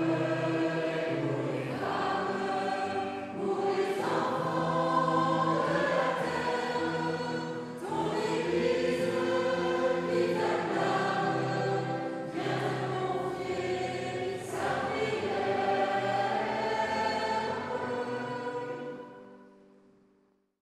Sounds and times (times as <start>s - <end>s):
Music: 0.0s - 20.6s.